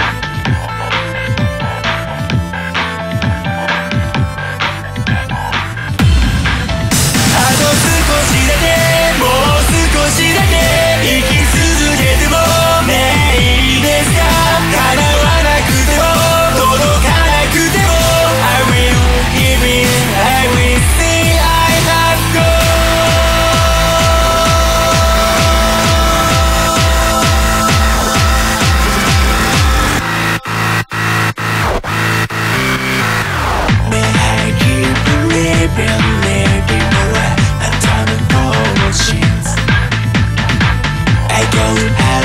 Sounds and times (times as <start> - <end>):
Music: 0.0 - 42.2.